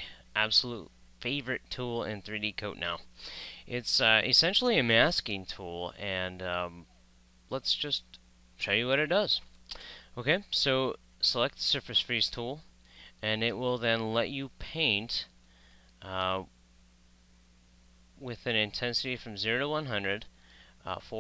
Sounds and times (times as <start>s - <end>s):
Speech: 0.0s - 3.1s, 3.7s - 6.9s, 7.5s - 9.5s, 10.2s - 15.3s, 16.0s - 16.5s, 18.2s - 20.3s, 20.9s - 21.2s.